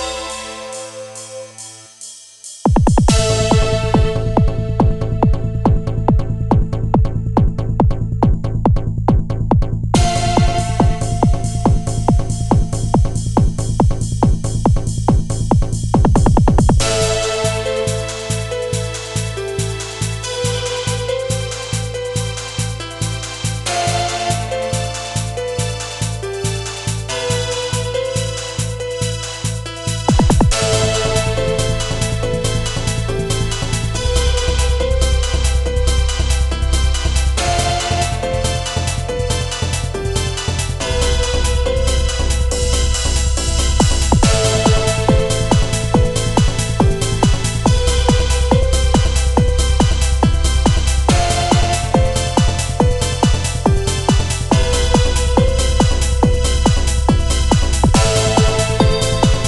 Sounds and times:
Music: 0:00.0 - 0:59.4.

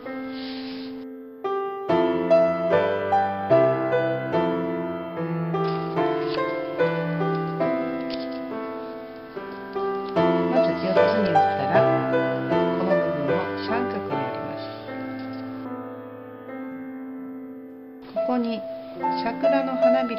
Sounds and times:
Music: 0:00.0 - 0:20.1
Speech: 0:10.5 - 0:14.8, 0:18.2 - 0:20.1.

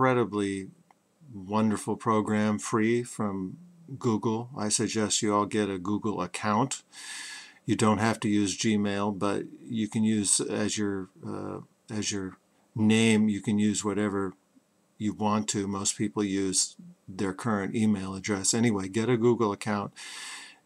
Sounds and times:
Speech: 0:00.0 - 0:06.9, 0:07.7 - 0:14.4, 0:15.0 - 0:20.0.

